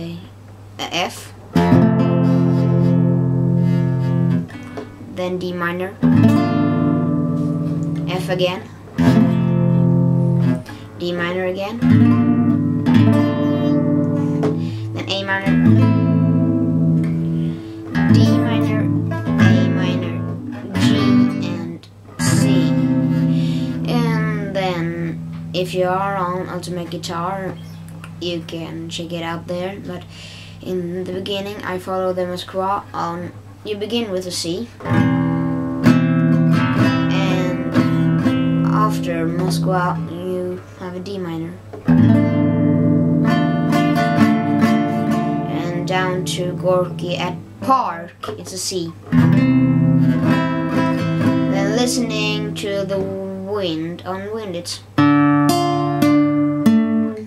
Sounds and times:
Speech: 0.0s - 1.4s, 5.1s - 6.1s, 8.1s - 8.7s, 11.0s - 11.9s, 15.0s - 15.7s, 18.1s - 23.0s, 23.8s - 34.8s, 36.9s - 37.8s, 38.6s - 41.6s, 45.4s - 49.0s, 51.5s - 54.9s
Music: 1.5s - 5.1s, 6.0s - 28.4s, 34.8s - 40.7s, 41.7s - 47.8s, 48.9s - 57.2s.

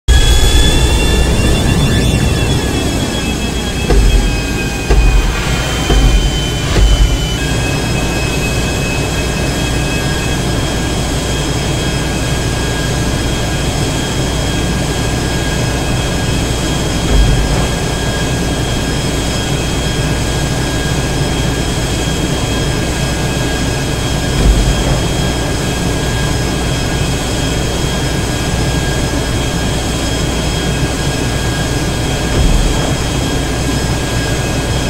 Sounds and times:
Jet engine: 0.0s - 34.8s.

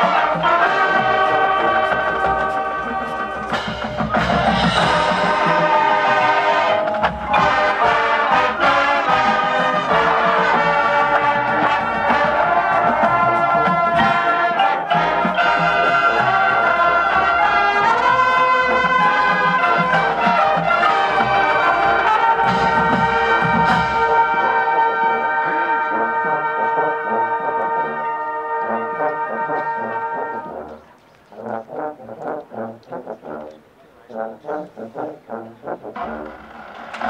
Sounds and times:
Music: 0.0s - 37.0s
Outside, urban or manmade: 0.0s - 37.0s
Speech: 0.9s - 3.7s, 32.8s - 35.8s.

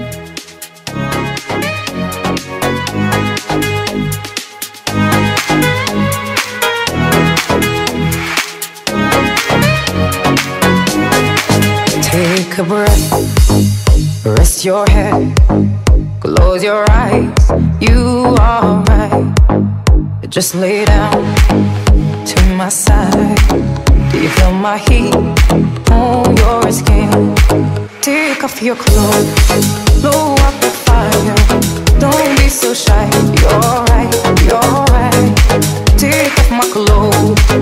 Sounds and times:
Rhythm and blues: 0.0s - 37.6s.

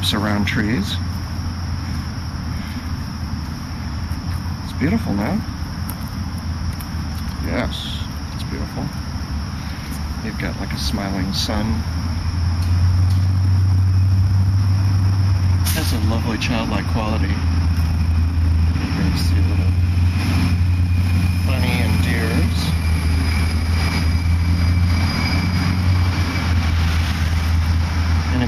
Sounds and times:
Speech: 0.0s - 1.1s, 4.7s - 5.4s, 7.4s - 9.0s, 10.2s - 11.8s, 15.7s - 17.4s, 19.0s - 19.8s, 21.4s - 22.8s
Outside, urban or manmade: 0.0s - 28.4s
Aircraft: 11.8s - 28.4s.

